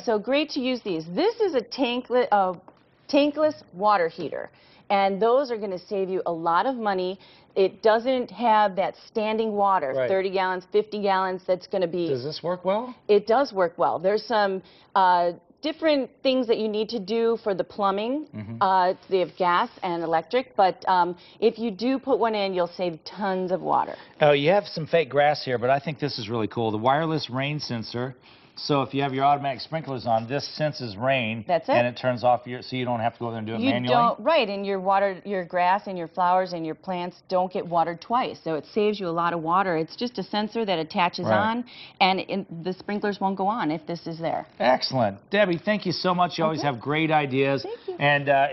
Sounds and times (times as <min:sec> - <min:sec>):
Speech: 0:18.4 - 0:19.4, 0:23.8 - 0:34.5, 0:41.2 - 0:41.6, 0:44.6 - 0:48.5.